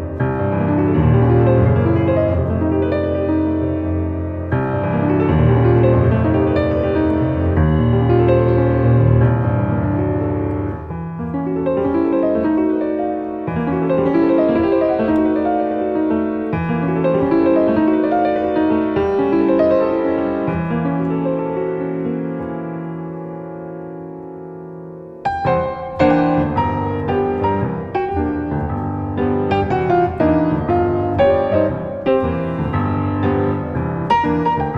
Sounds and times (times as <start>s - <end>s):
Music: 0.0s - 34.7s.